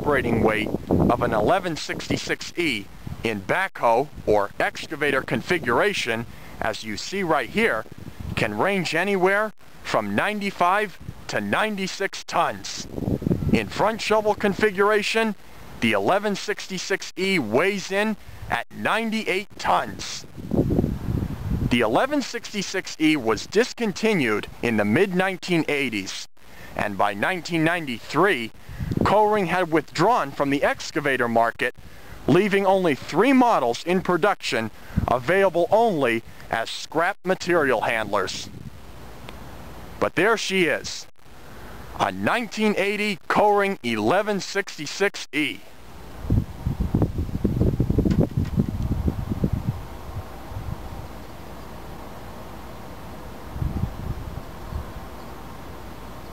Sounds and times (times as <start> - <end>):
Speech: 0.0 - 12.9, 13.6 - 20.3, 21.7 - 38.5, 40.0 - 41.1, 42.0 - 45.7.